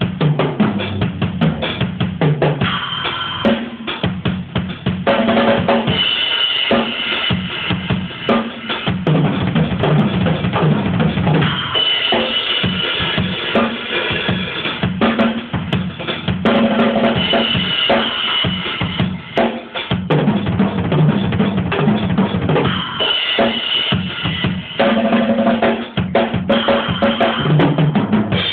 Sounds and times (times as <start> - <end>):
Music: 0.0 - 28.5.